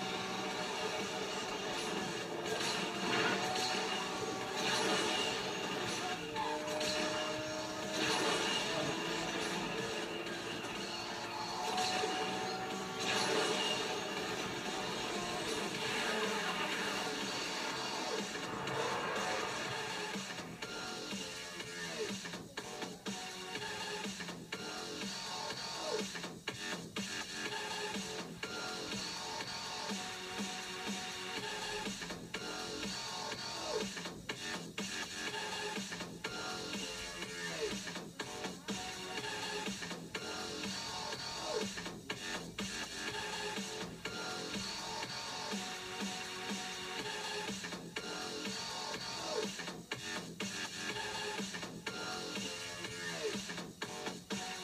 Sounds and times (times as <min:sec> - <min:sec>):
Music: 0:00.0 - 0:54.6.